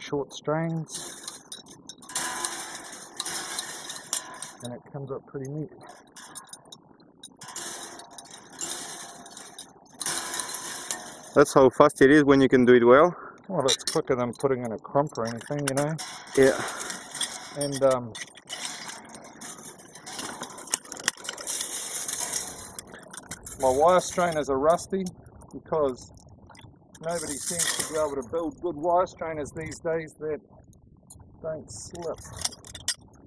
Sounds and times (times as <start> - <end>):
Speech: 0.0 - 1.0, 4.6 - 5.9, 11.4 - 16.7, 17.6 - 18.2, 23.6 - 26.1, 27.0 - 30.4, 31.4 - 32.3.